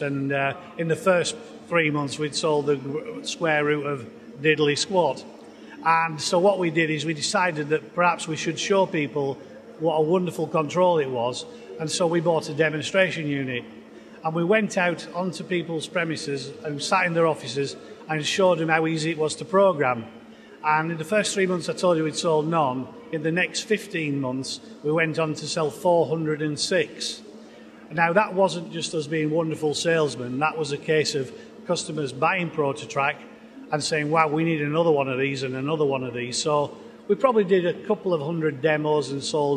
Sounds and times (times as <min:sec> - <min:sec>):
Speech: 0:00.0 - 0:39.5.